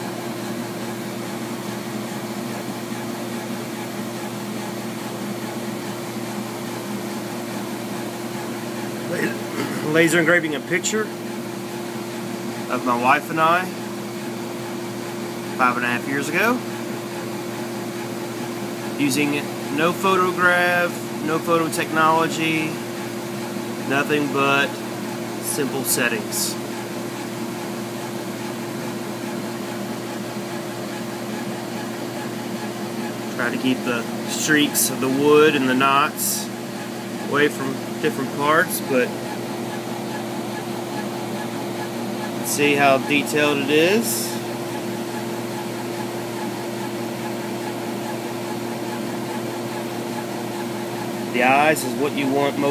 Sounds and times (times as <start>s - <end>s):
Speech: 9.1s - 11.1s, 12.7s - 13.8s, 15.6s - 16.6s, 19.0s - 22.8s, 23.9s - 24.8s, 25.4s - 26.6s, 33.4s - 36.5s, 37.3s - 39.2s, 42.4s - 44.4s, 51.3s - 52.7s.